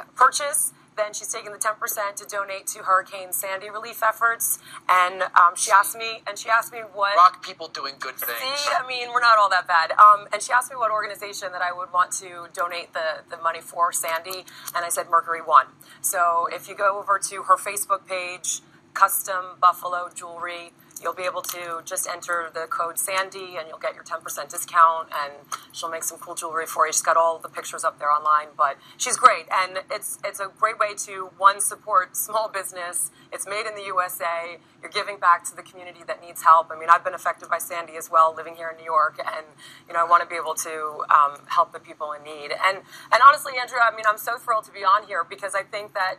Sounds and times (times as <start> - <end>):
Speech: 0.0 - 46.1
Radio: 5.2 - 10.6.